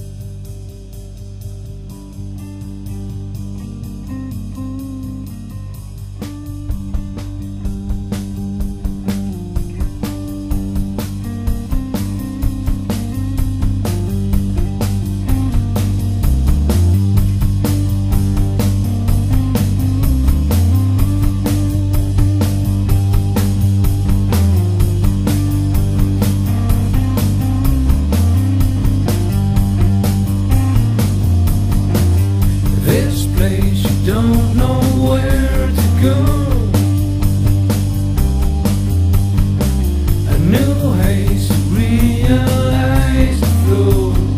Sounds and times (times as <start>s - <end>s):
Music: 0.0s - 44.3s.